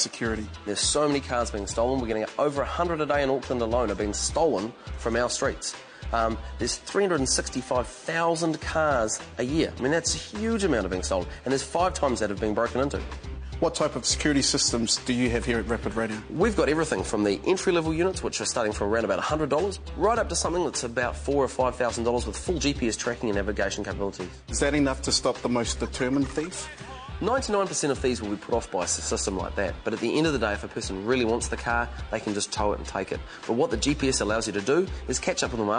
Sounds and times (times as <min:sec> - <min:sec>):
Music: 0:00.0 - 0:35.7
Speech: 0:00.0 - 0:35.7.